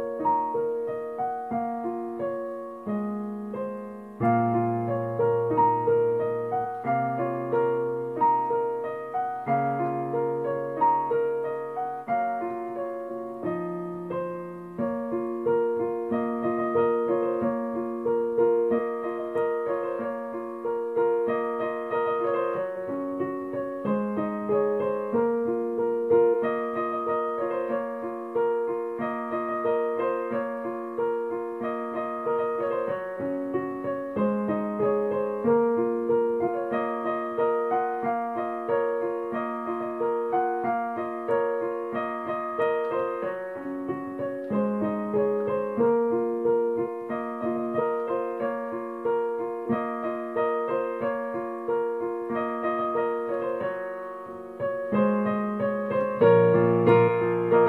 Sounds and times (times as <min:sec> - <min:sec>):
Music: 0:00.0 - 0:57.6.